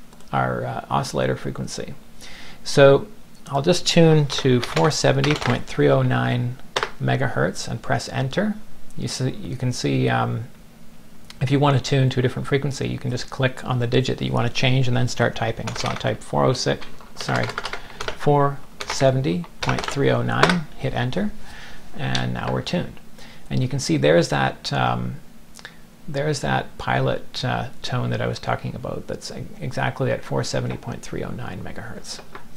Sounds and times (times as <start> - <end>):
Speech: 0.3 - 2.0, 2.6 - 10.6, 11.3 - 17.6, 18.2 - 21.4, 22.0 - 25.2, 26.1 - 32.3
Typing: 4.3 - 5.6, 15.6 - 16.1, 16.8 - 18.2, 18.8 - 19.0, 19.6 - 20.6.